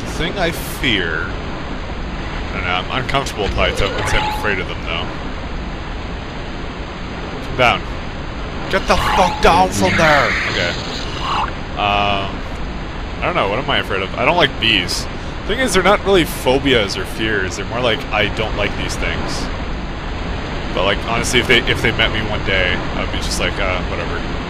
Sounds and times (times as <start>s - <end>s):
Speech: 0.0s - 1.3s, 2.5s - 5.1s, 7.4s - 7.8s, 8.7s - 10.9s, 11.8s - 12.4s, 13.2s - 19.5s, 20.8s - 24.3s.